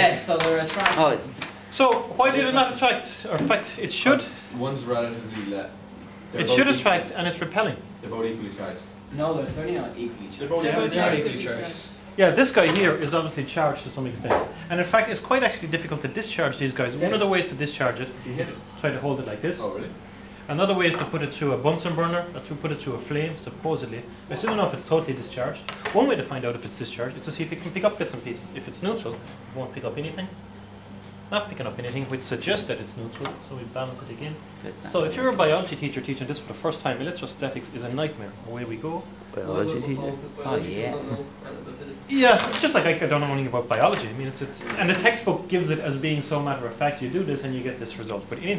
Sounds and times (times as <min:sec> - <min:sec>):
Speech: 0:00.0 - 0:30.4, 0:31.3 - 0:48.5.